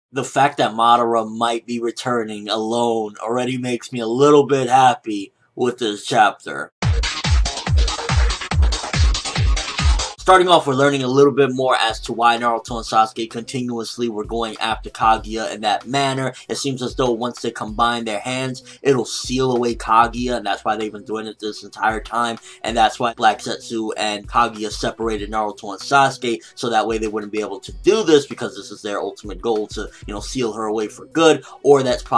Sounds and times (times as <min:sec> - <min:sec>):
Trance music: 0:06.8 - 0:10.6.